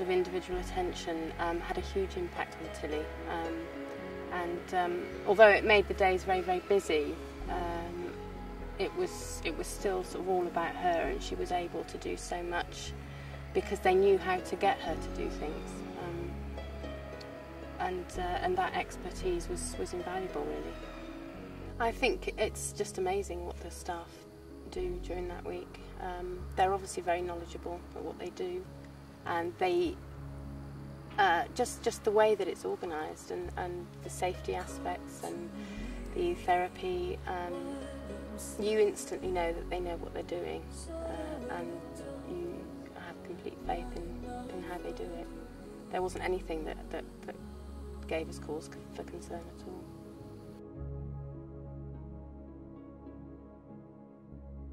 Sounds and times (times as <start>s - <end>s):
Speech: 0.0s - 3.6s, 4.3s - 8.2s, 8.8s - 16.4s, 17.8s - 20.7s, 21.8s - 28.7s, 29.3s - 30.0s, 31.2s - 37.7s, 38.3s - 47.4s, 48.0s - 49.9s
Music: 0.0s - 54.7s.